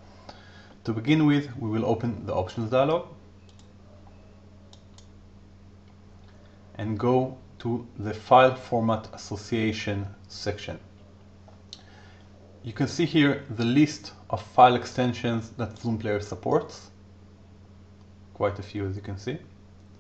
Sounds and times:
Speech: 0.8s - 3.2s, 6.8s - 10.9s, 12.6s - 17.0s, 18.4s - 19.6s.

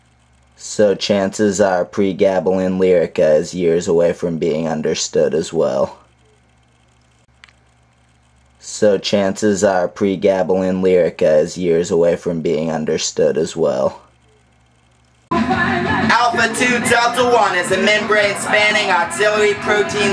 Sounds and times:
Speech: 0.6s - 6.1s, 8.6s - 14.1s, 16.1s - 20.1s
Music: 15.3s - 20.1s.

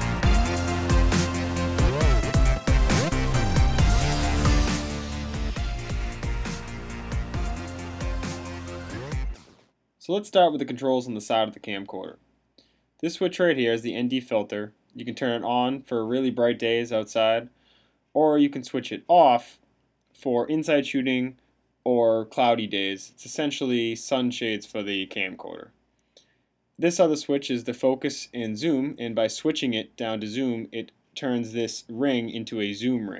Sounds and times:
Music: 0.0s - 9.6s
Speech: 10.0s - 12.2s, 13.0s - 17.5s, 18.2s - 19.6s, 20.2s - 25.8s, 26.8s - 33.1s.

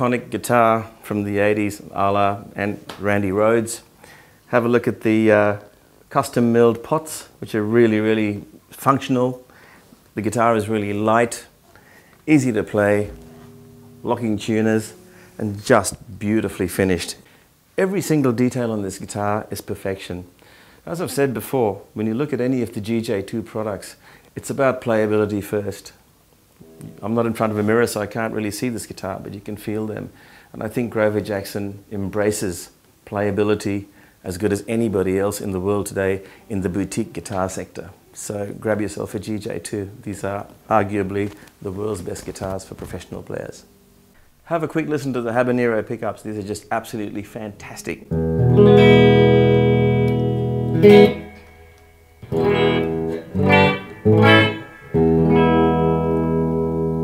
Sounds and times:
Guitar: 10.1s - 18.5s, 26.5s - 29.0s, 47.8s - 57.0s.

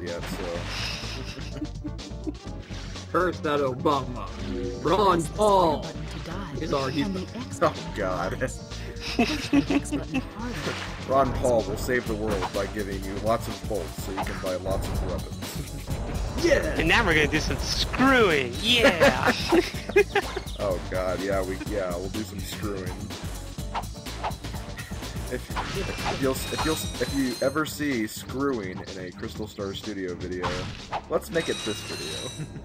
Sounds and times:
Speech: 0.0s - 0.6s, 3.2s - 8.6s, 9.3s - 15.5s, 16.4s - 19.6s, 20.6s - 23.0s, 25.3s - 32.3s
Music: 0.0s - 32.6s.

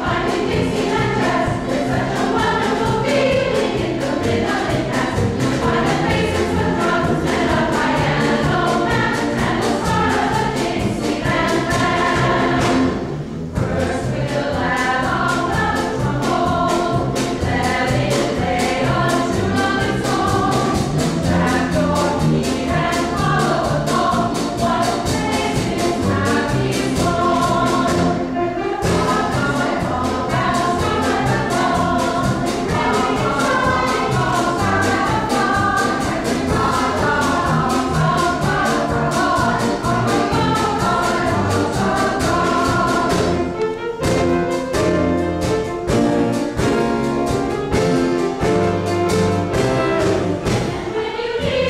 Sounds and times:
Music: 0.0s - 51.6s.

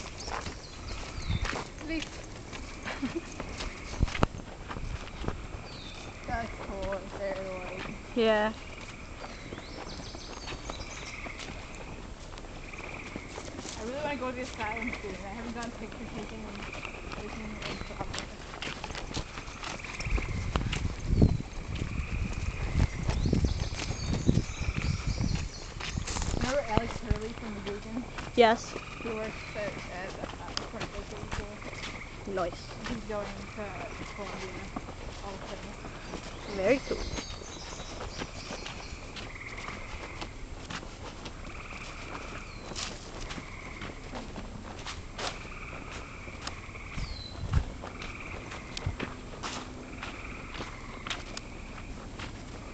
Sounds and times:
Walk, footsteps: 0.0s - 52.7s
Speech: 6.3s - 8.6s, 13.8s - 18.3s, 26.4s - 35.8s, 36.5s - 37.2s.

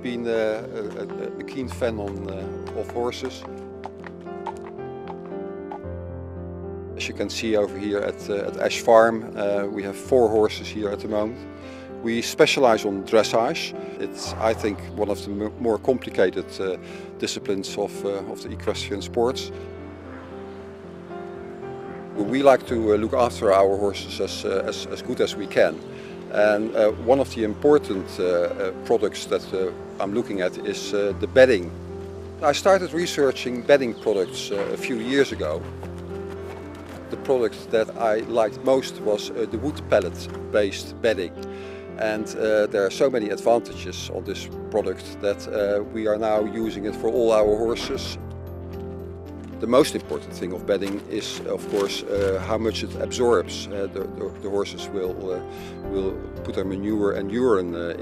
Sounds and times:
Speech: 0.0s - 3.4s, 7.0s - 11.4s, 12.0s - 19.5s, 22.2s - 31.7s, 32.4s - 35.6s, 37.1s - 41.4s, 42.0s - 48.2s, 49.6s - 58.0s
Music: 0.0s - 58.0s.

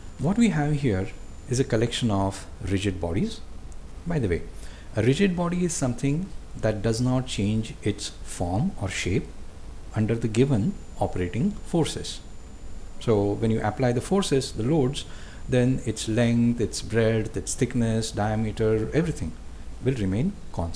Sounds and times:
Speech: 0.2s - 9.3s, 9.9s - 12.2s, 13.0s - 20.7s.

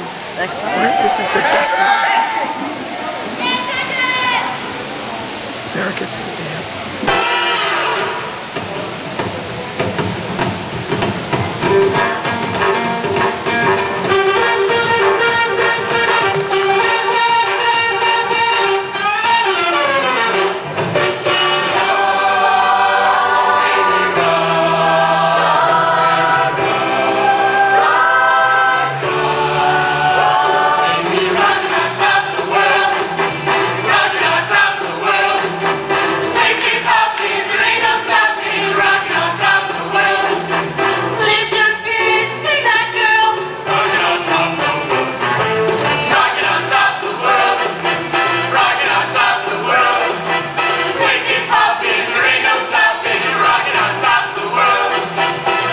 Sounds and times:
Music: 7.1s - 55.7s.

